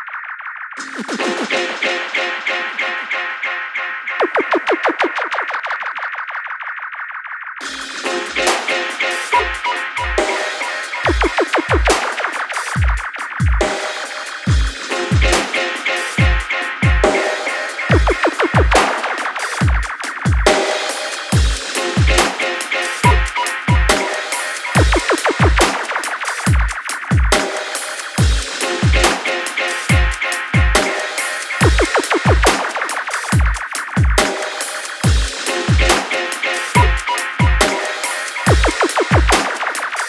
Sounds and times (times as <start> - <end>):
Drum and bass: 0.0 - 40.0.